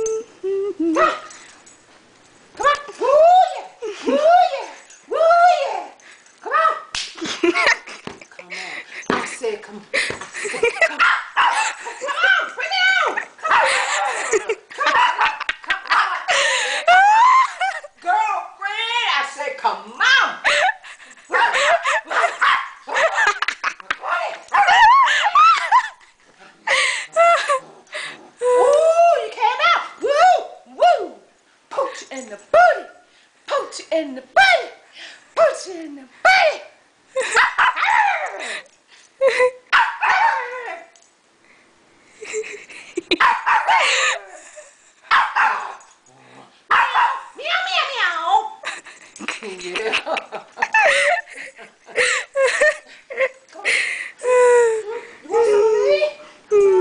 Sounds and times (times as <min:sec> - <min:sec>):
Speech: 0:08.4 - 0:09.9, 0:12.1 - 0:13.2, 0:18.0 - 0:20.4, 0:35.4 - 0:36.8, 0:47.4 - 0:48.6, 0:54.8 - 0:56.8.